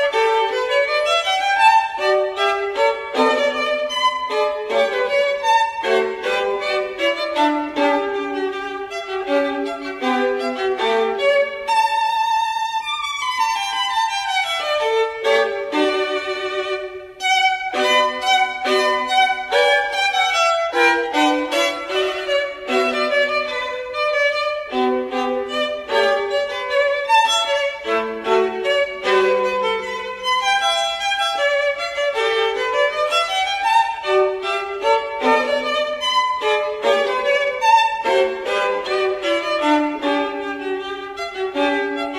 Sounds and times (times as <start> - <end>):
Violin, fiddle: 0.0 - 42.1.